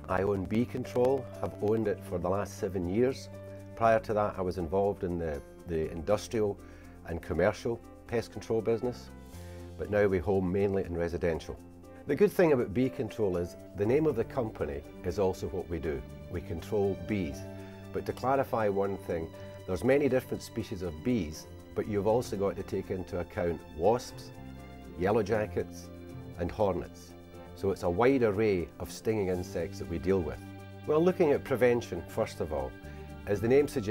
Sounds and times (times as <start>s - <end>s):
Speech: 0.0s - 9.1s, 9.8s - 24.4s, 25.0s - 33.9s
Music: 0.0s - 33.9s.